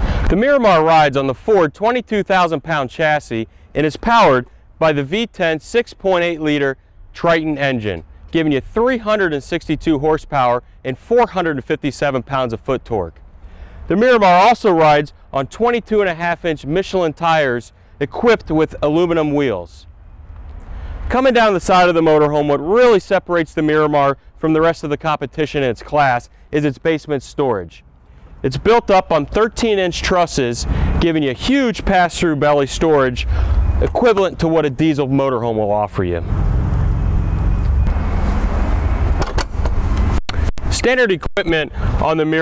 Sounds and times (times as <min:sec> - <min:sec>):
Outside, rural or natural: 0:00.0 - 0:42.4
Vehicle: 0:00.0 - 0:42.4
Speech: 0:00.3 - 0:13.2, 0:13.9 - 0:19.9, 0:21.1 - 0:27.8, 0:28.4 - 0:36.3, 0:40.7 - 0:42.4.